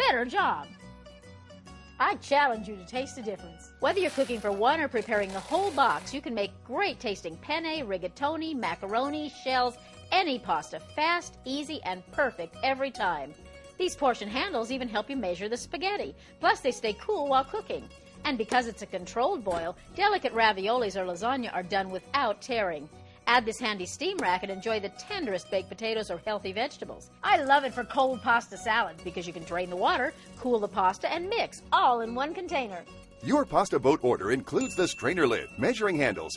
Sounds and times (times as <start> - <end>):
Music: 0.0 - 36.3
Speech: 13.8 - 36.3.